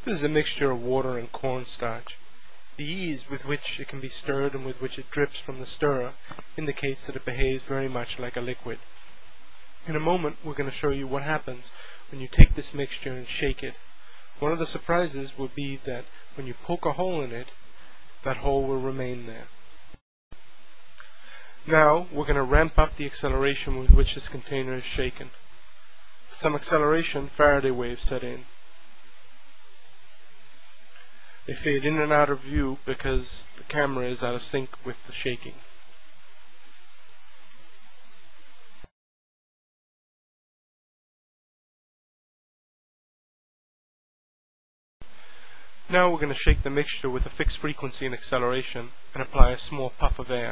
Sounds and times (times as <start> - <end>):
Speech: 0.0 - 2.2, 2.8 - 8.8, 9.8 - 13.8, 14.4 - 17.6, 18.2 - 19.5, 21.6 - 25.4, 26.3 - 28.5, 31.5 - 35.6, 45.9 - 50.5.